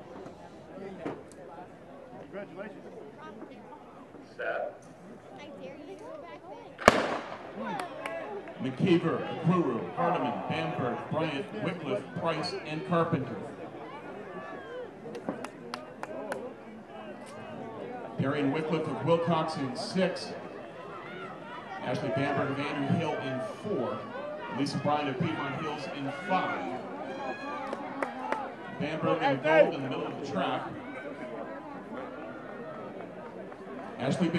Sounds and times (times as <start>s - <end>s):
Outside, urban or manmade: 0.0s - 34.3s
Run: 5.0s - 34.3s
Female speech, woman speaking: 5.3s - 6.8s.